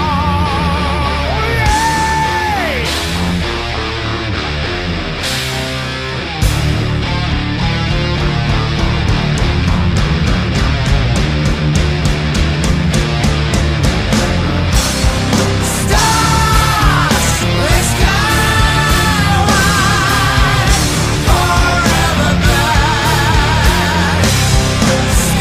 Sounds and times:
Angry music: 0.0s - 25.4s.

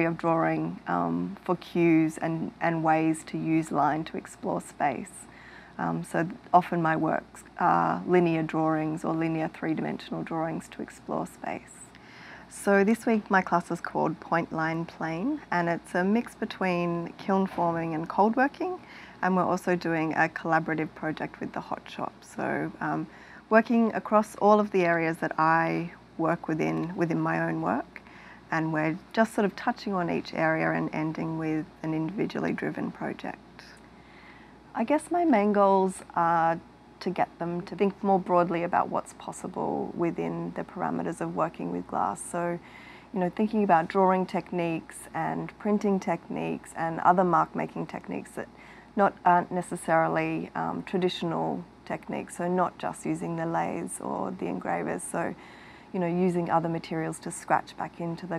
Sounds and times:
Speech: 0.0s - 11.9s, 12.5s - 33.8s, 34.8s - 42.6s, 43.2s - 55.4s, 56.0s - 58.3s.

